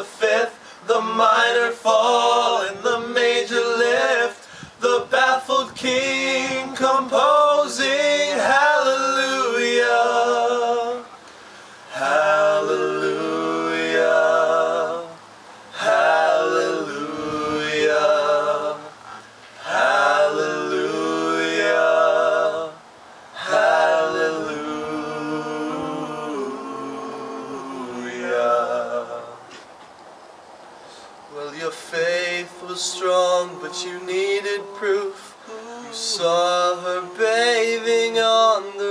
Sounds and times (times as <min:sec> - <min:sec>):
A capella: 0:00.0 - 0:29.7, 0:31.0 - 0:38.9.